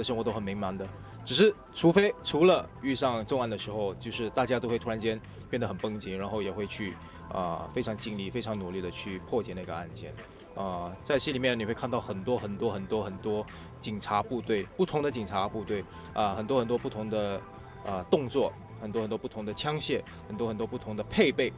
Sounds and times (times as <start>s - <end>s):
Music: 0.0s - 21.5s
Speech: 0.0s - 21.5s.